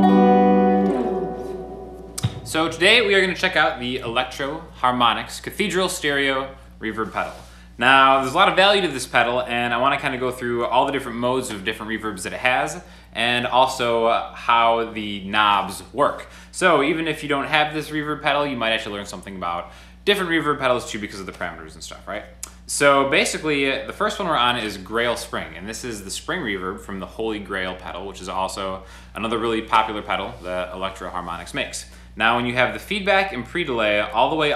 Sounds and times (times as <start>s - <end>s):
Speech: 2.2s - 34.5s.